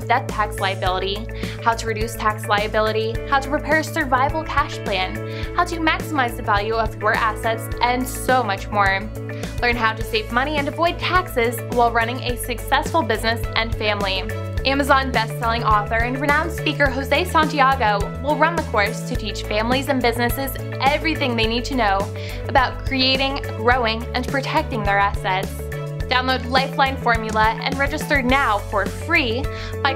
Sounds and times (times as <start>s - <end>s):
Music: 0.0s - 29.9s
Speech: 0.0s - 29.9s.